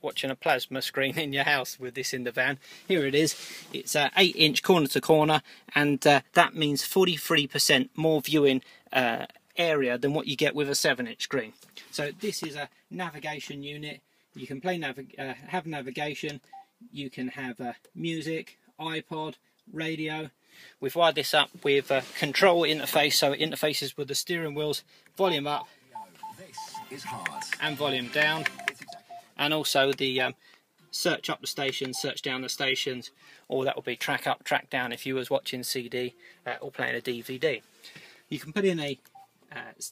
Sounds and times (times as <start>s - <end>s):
Speech: 0.0s - 25.7s, 26.4s - 28.5s, 29.4s - 37.6s, 38.3s - 39.9s.